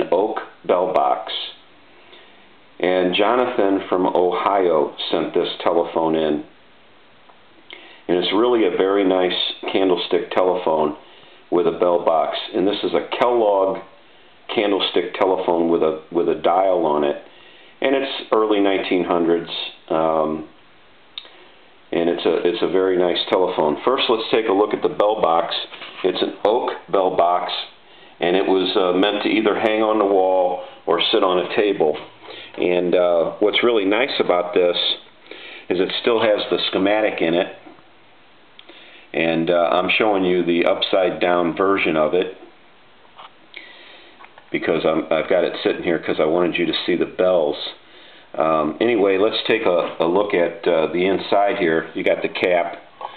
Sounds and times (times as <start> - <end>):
Speech: 0.0 - 1.6, 2.8 - 6.6, 8.1 - 20.6, 21.9 - 35.1, 35.7 - 37.8, 39.1 - 42.5, 44.5 - 52.9.